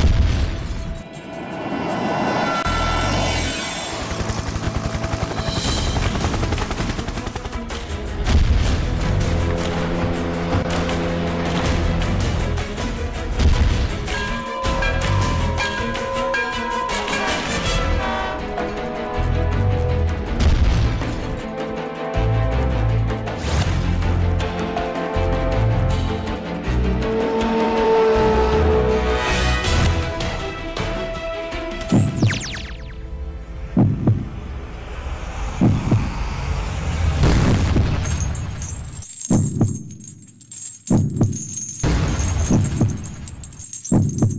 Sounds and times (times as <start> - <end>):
Music: 0.0 - 44.3.